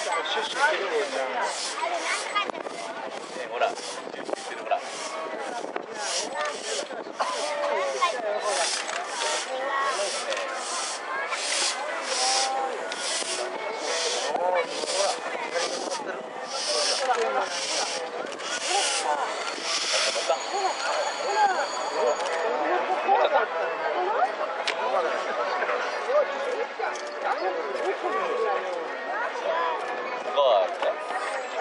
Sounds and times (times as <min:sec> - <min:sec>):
Hiss: 0:06.0 - 0:20.3.